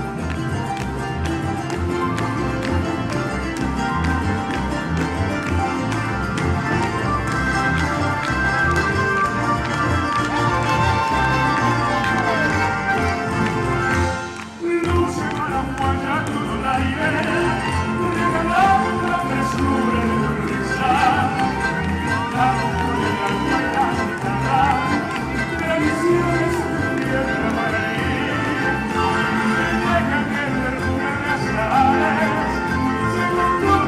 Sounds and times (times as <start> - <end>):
Music of Latin America: 0.0 - 33.8
Singing: 14.6 - 33.8.